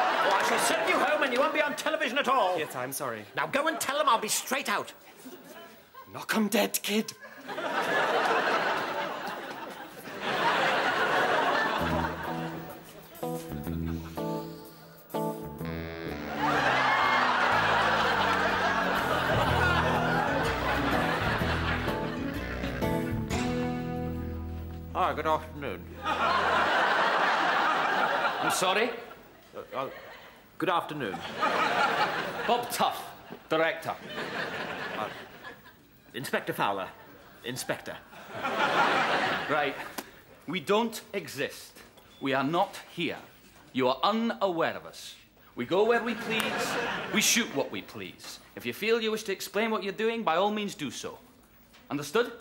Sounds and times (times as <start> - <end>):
Laughter: 0.0 - 1.6, 7.1 - 14.2, 16.4 - 23.0, 26.0 - 30.4, 31.0 - 32.7, 33.3 - 35.9, 37.0 - 40.2, 46.1 - 47.2.